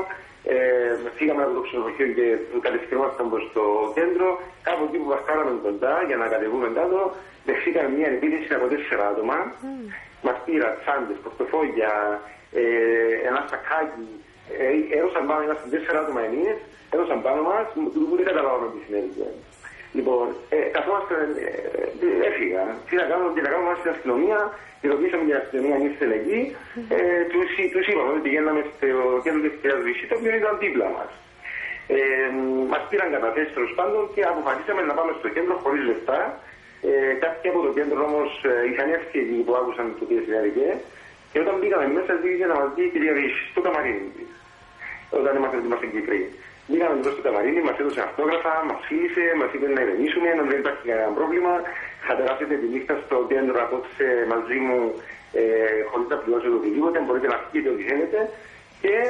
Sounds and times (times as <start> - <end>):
Speech: 0.0 - 59.0.